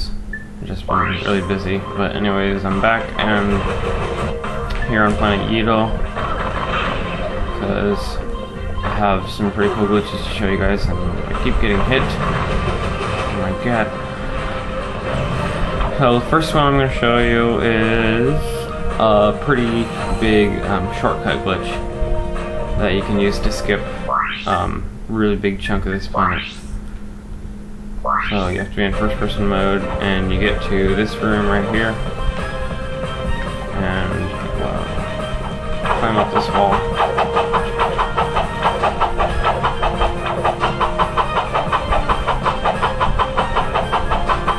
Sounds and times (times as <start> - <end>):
Speech: 0.0 - 3.6, 4.8 - 6.0, 7.6 - 8.2, 8.9 - 12.2, 13.4 - 13.9, 16.0 - 21.8, 22.8 - 23.8, 24.5 - 26.6, 28.3 - 32.0, 33.8 - 34.9, 36.0 - 36.8
Music: 0.0 - 26.9, 27.8 - 44.5.